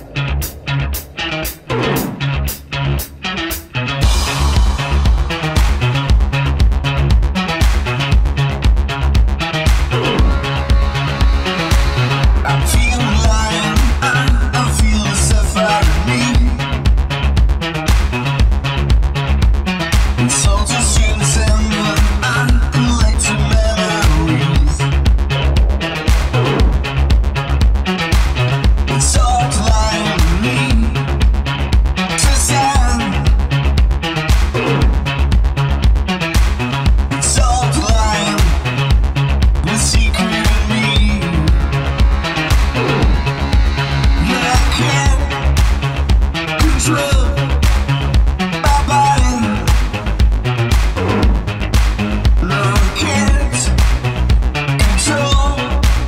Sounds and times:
Music: 0.0 - 56.0.

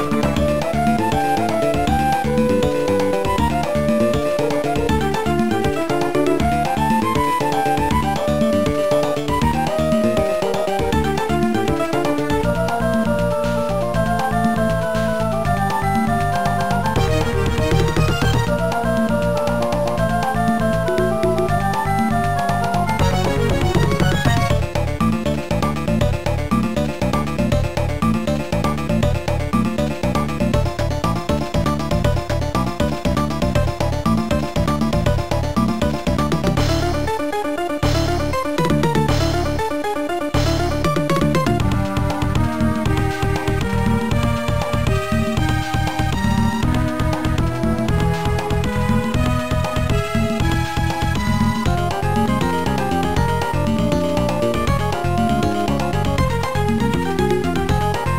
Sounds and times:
Soundtrack music: 0.0 - 58.1.

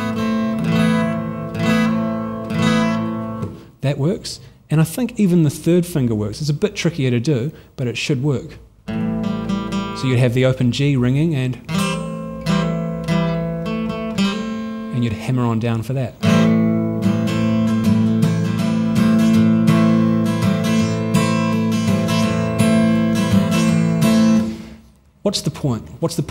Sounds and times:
Speech: 3.8 - 8.6, 10.0 - 11.7, 14.9 - 16.2, 25.2 - 26.3.

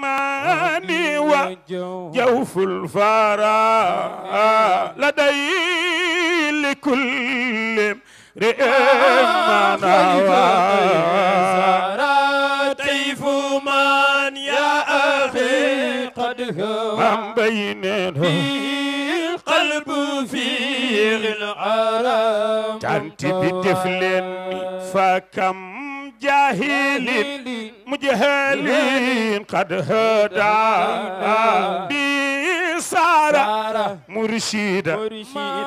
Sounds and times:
Mantra: 0.0 - 35.6.

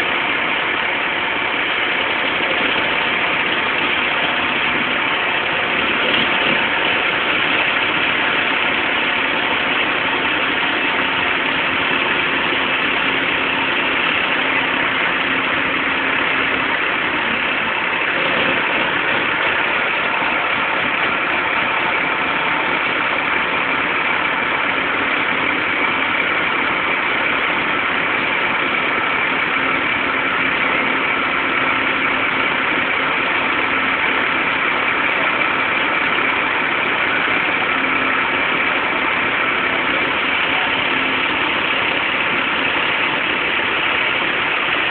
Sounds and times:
Idling: 0.0 - 44.9
Truck: 0.0 - 44.9.

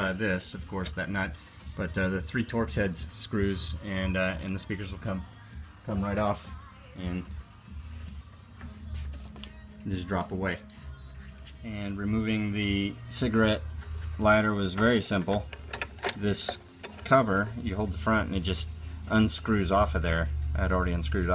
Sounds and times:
Speech: 0.0 - 5.3, 5.9 - 7.3, 9.9 - 10.6, 14.2 - 15.5, 16.2 - 21.3.

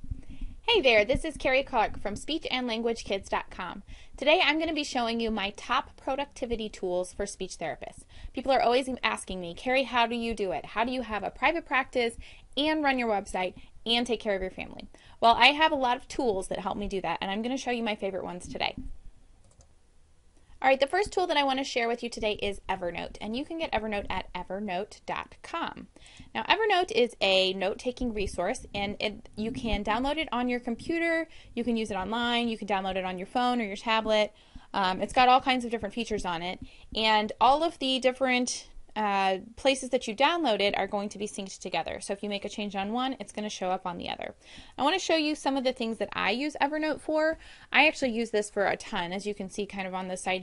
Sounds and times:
Speech: 0.7 - 18.9, 20.6 - 50.4.

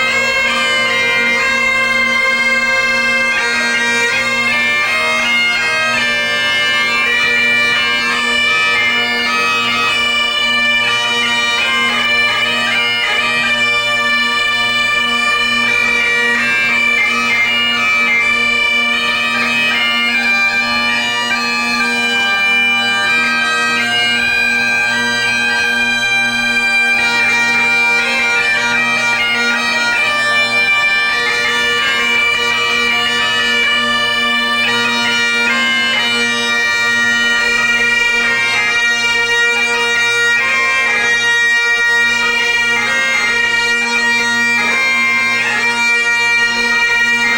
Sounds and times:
Bagpipes: 0.0 - 47.3.

